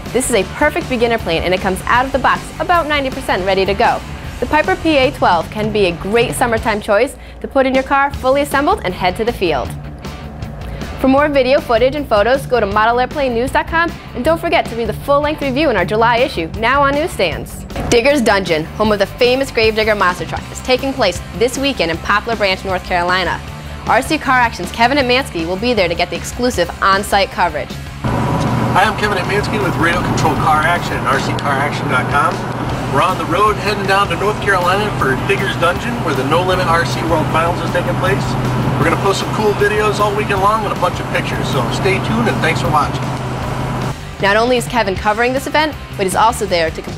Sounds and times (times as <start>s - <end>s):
Music: 0.0s - 46.9s
Speech: 0.2s - 9.7s, 11.0s - 27.7s, 28.8s - 43.0s, 44.2s - 46.9s.